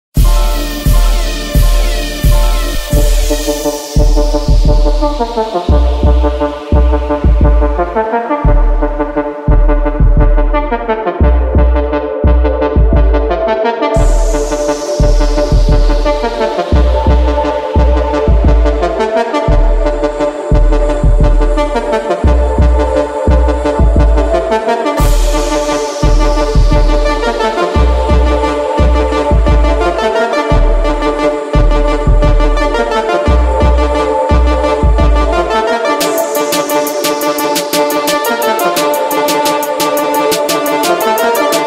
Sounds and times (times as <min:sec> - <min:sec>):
Brass instrument: 0:00.2 - 0:41.6.